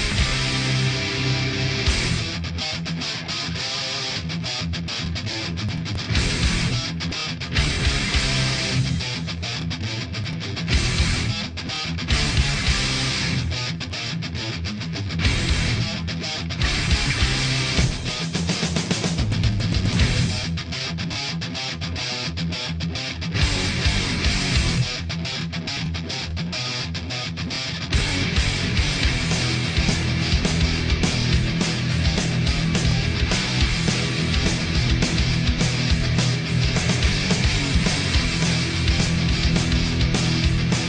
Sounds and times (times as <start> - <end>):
Music: 0.0 - 40.8.